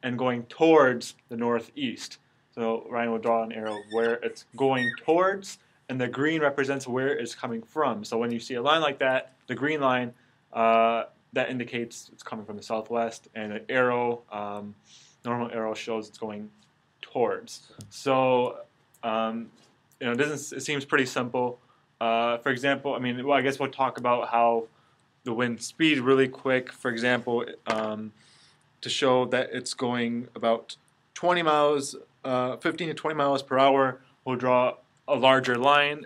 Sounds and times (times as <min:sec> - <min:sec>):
Speech: 0:00.0 - 0:24.7, 0:25.3 - 0:28.2, 0:28.8 - 0:36.0.